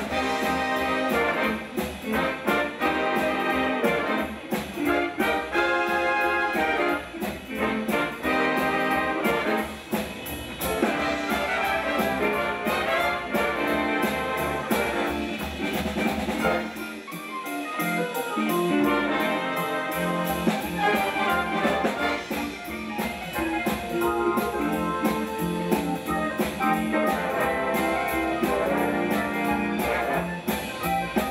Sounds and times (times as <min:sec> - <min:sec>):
Orchestra: 0:00.0 - 0:31.3
Swing music: 0:00.0 - 0:31.3
Trombone: 0:00.0 - 0:31.3.